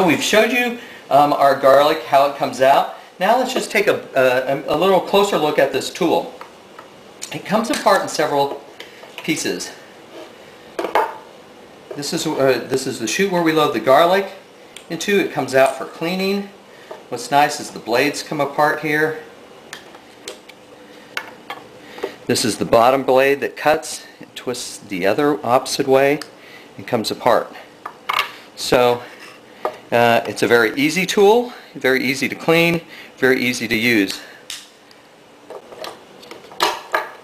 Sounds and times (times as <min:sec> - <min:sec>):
Speech: 0:00.0 - 0:06.4, 0:07.2 - 0:08.6, 0:09.2 - 0:09.8, 0:12.0 - 0:19.3, 0:22.3 - 0:27.6, 0:28.6 - 0:29.1, 0:29.9 - 0:34.3.